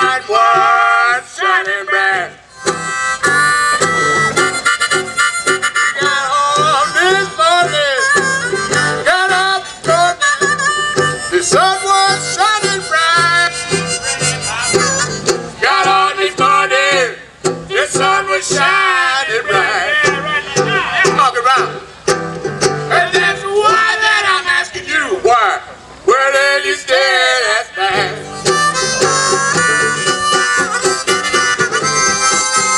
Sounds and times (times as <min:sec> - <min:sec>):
Music: 0:02.5 - 0:23.8, 0:28.0 - 0:32.7.